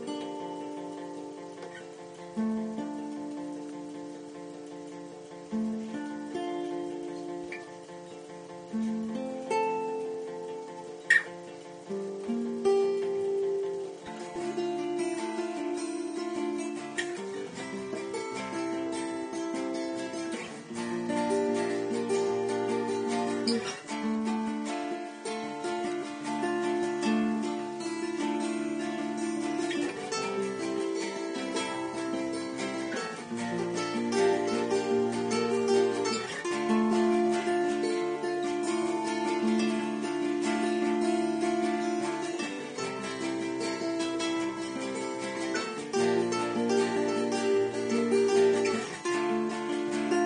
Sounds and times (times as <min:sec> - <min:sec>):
Acoustic guitar: 0:00.0 - 0:50.2
Strum: 0:00.0 - 0:50.2.